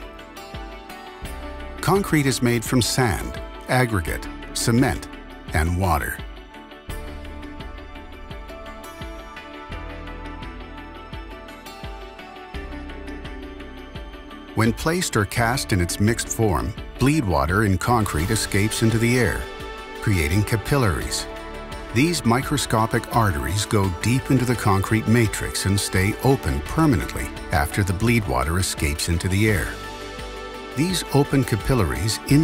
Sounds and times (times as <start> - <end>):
Music: 0.0 - 32.4
Speech: 1.8 - 6.3, 14.6 - 21.3, 21.9 - 29.8, 30.8 - 32.4.